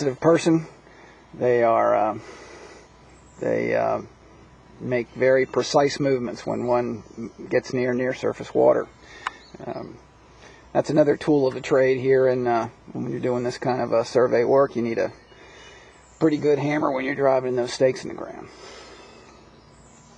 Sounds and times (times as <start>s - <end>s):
Speech: 0.0s - 0.8s, 1.4s - 2.2s, 3.4s - 4.1s, 4.8s - 8.9s, 9.6s - 10.0s, 10.8s - 15.2s, 16.2s - 18.6s.